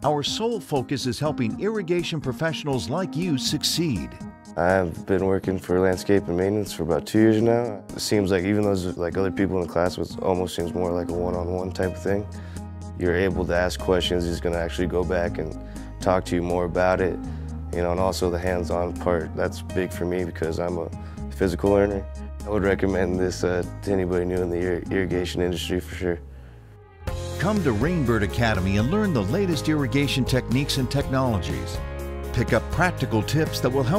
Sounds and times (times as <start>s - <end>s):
Speech: 0.0s - 12.3s, 13.0s - 26.2s, 27.4s - 33.9s
Music: 0.0s - 33.9s.